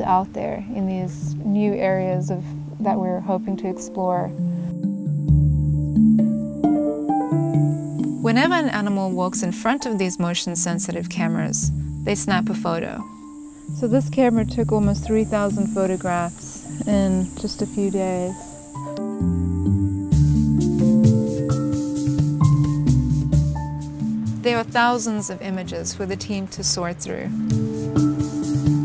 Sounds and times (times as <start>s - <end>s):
Speech: 0.0s - 4.3s, 8.2s - 13.0s, 13.8s - 18.4s, 24.5s - 27.3s
Music: 0.0s - 28.8s.